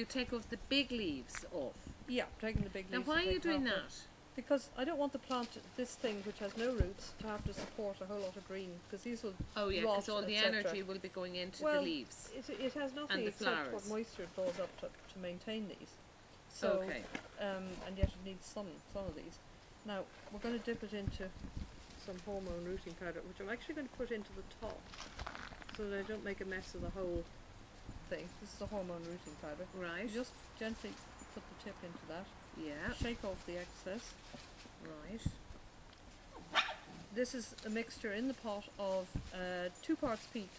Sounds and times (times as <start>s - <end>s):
Speech: 0.0s - 21.4s, 22.0s - 24.8s, 25.8s - 27.3s, 28.1s - 34.2s, 34.8s - 35.4s, 37.2s - 40.5s.